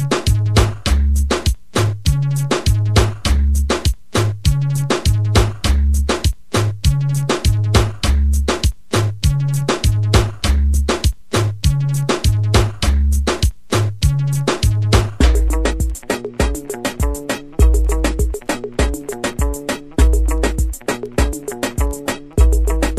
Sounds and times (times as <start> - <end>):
Funk: 0.0 - 22.9.